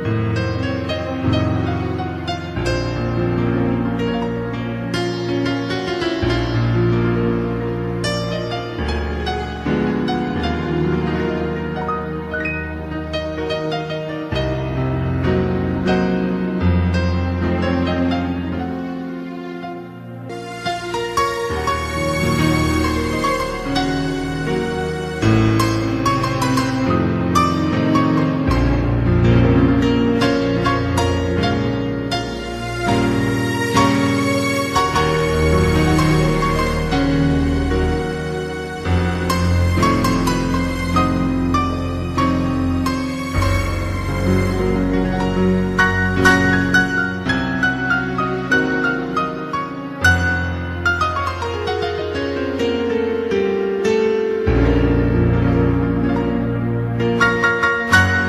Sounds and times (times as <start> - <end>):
Tender music: 0.0 - 58.2.